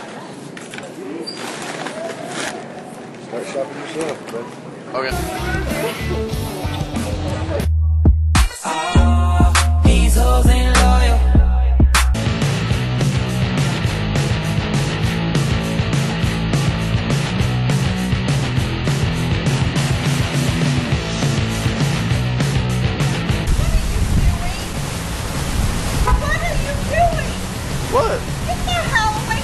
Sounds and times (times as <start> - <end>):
Music: 5.1 - 29.4
Outside, rural or natural: 23.4 - 29.4.